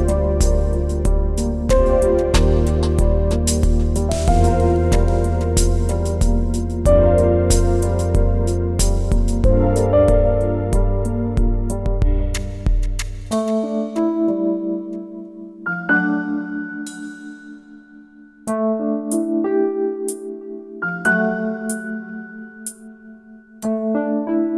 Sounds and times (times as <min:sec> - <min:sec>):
Soundtrack music: 0:00.0 - 0:13.6.